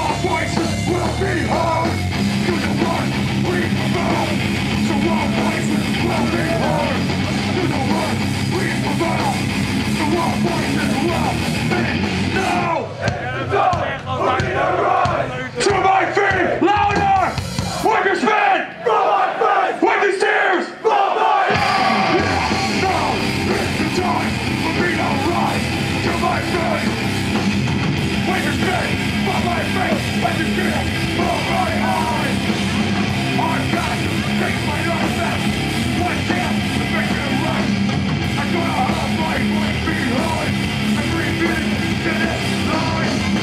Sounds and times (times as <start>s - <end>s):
Singing: 0.0s - 27.0s, 28.1s - 43.4s.